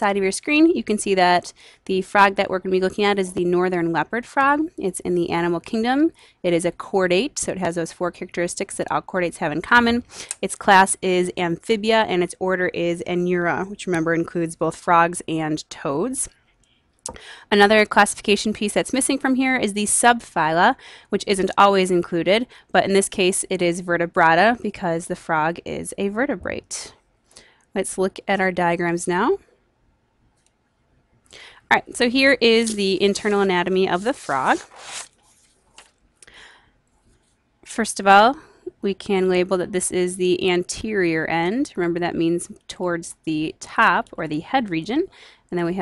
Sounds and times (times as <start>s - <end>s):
Speech: 0.0s - 16.3s, 17.5s - 26.9s, 27.8s - 29.4s, 31.7s - 34.7s, 37.7s - 45.8s.